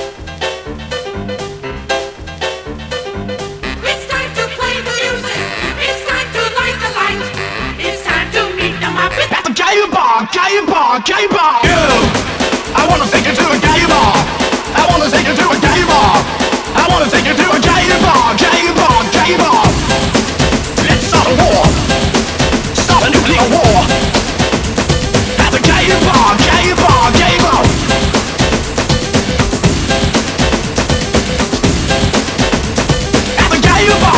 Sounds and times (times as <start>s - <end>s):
Music: 0.0s - 34.1s.